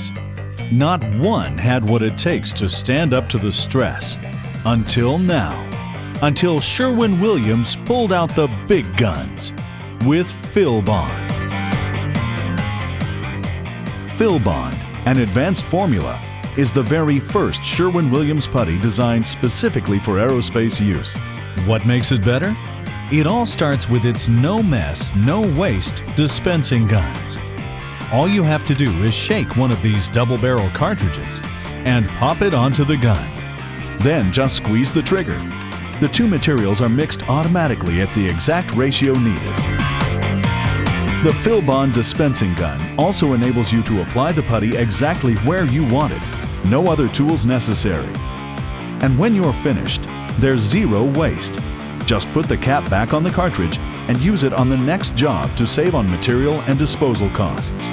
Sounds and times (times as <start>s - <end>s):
Speech: 0.0s - 11.3s, 14.1s - 27.4s, 28.1s - 33.4s, 34.0s - 39.6s, 41.2s - 48.2s, 49.0s - 57.9s
Music: 0.0s - 57.9s.